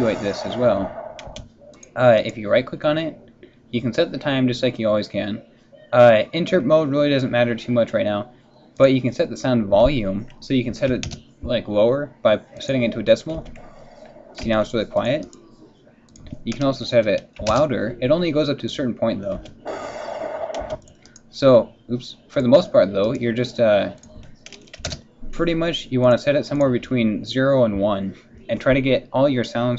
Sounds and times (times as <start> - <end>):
Speech: 0.0 - 1.0, 1.7 - 13.6, 14.4 - 19.7, 20.7 - 29.7
Typing: 24.0 - 25.0.